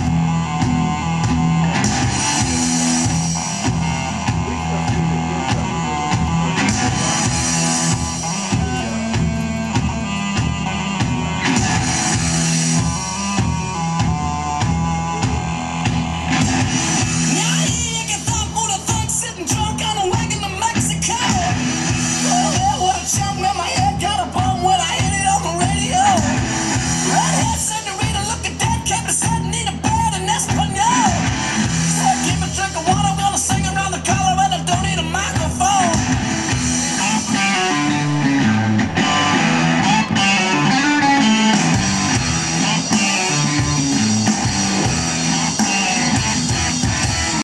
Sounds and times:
Music: 0.0 - 47.4.

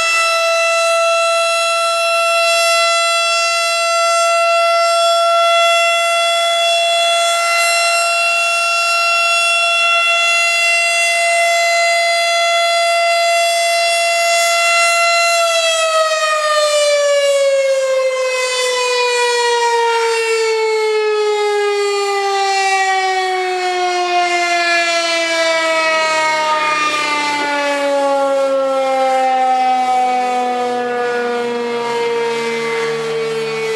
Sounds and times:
Civil defense siren: 0.0 - 33.7.

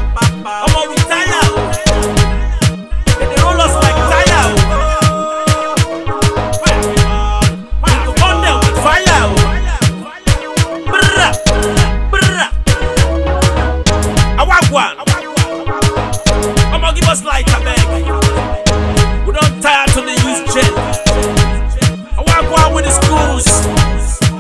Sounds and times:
Afrobeat: 0.0 - 24.4
Hip hop music: 0.0 - 24.4.

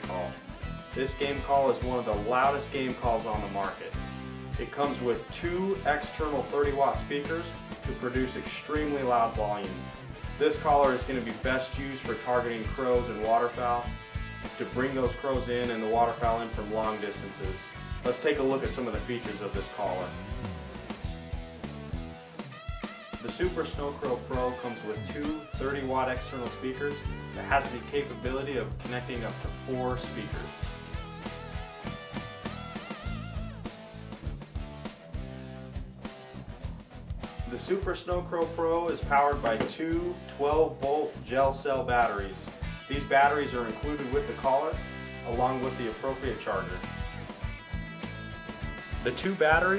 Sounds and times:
Speech: 0.0 - 0.4, 1.0 - 4.0, 4.6 - 9.8, 10.4 - 13.9, 14.6 - 20.2, 23.2 - 30.6, 37.5 - 46.9, 49.0 - 49.7
Music: 0.0 - 49.7.

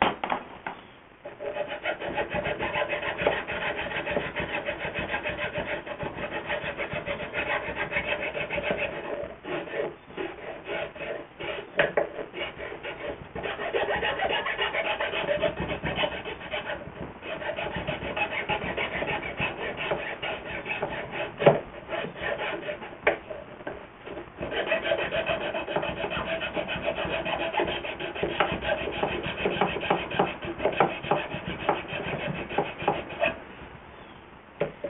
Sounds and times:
Wood: 0.0 - 0.8, 1.4 - 33.4
Filing (rasp): 1.2 - 23.2, 24.4 - 33.4
Rub: 1.3 - 22.8, 24.5 - 33.4.

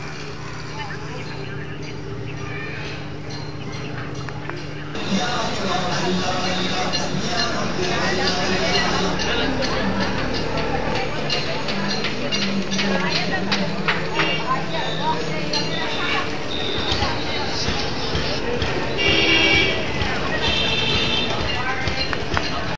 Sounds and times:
Speech: 0.0 - 22.7
Vehicle: 0.0 - 22.7.

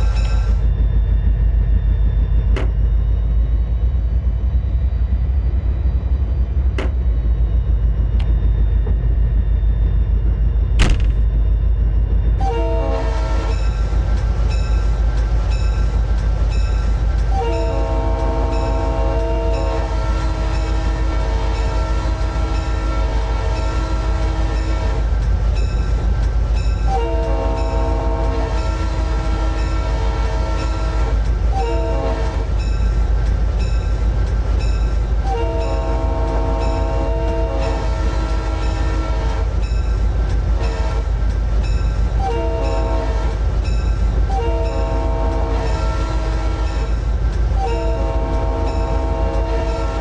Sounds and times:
Outside, urban or manmade: 0.0 - 50.0.

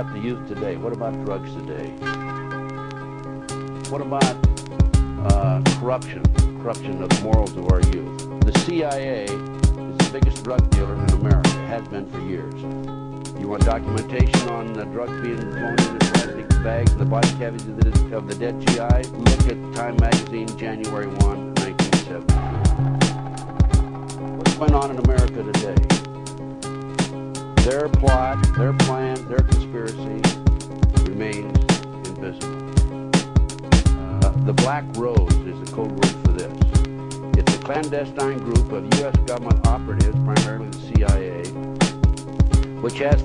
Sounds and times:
Speech: 0.0 - 2.0, 3.9 - 4.4, 5.2 - 12.7, 13.4 - 22.4, 24.4 - 25.9, 27.6 - 30.4, 31.0 - 32.5, 34.0 - 36.8, 37.4 - 41.6, 42.8 - 43.2
Music: 0.0 - 43.2.

